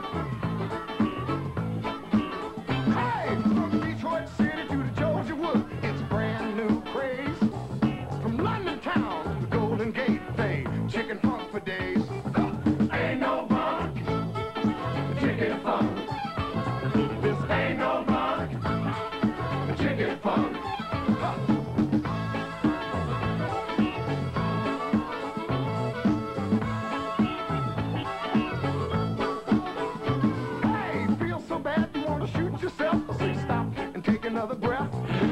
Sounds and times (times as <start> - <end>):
Funk: 0.0 - 35.3.